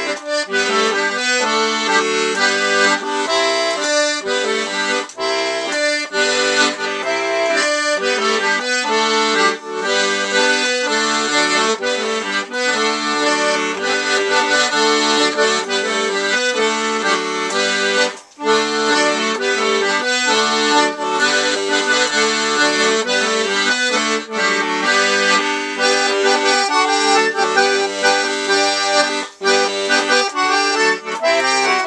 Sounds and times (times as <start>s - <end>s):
Musical instrument: 0.0s - 31.8s.